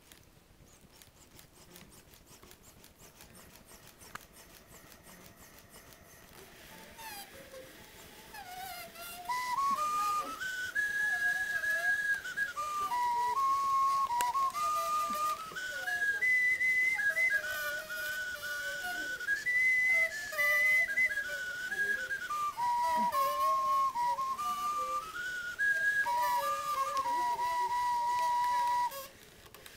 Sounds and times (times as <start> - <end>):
Inside, small room: 0.0 - 29.7
Flute: 2.6 - 29.7.